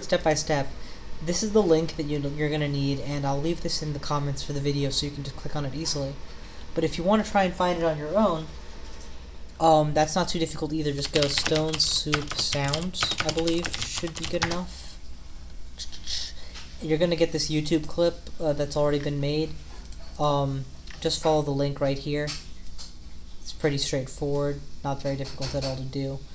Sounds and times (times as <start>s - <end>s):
Speech: 0.0s - 6.2s, 6.8s - 8.6s, 9.6s - 15.0s, 15.8s - 19.6s, 20.2s - 22.4s, 23.4s - 26.3s.